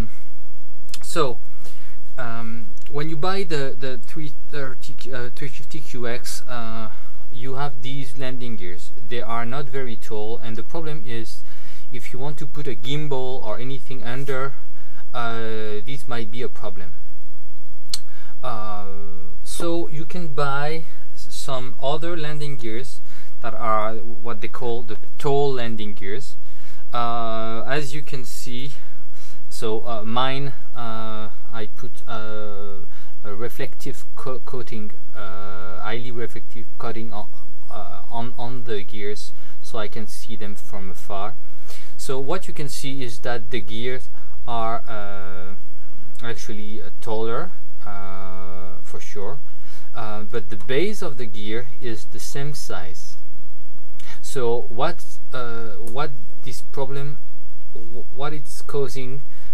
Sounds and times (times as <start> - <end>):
Speech: 1.0 - 1.4, 2.1 - 17.0, 18.4 - 41.4, 42.0 - 45.6, 46.2 - 53.2, 54.1 - 57.2, 57.8 - 59.3.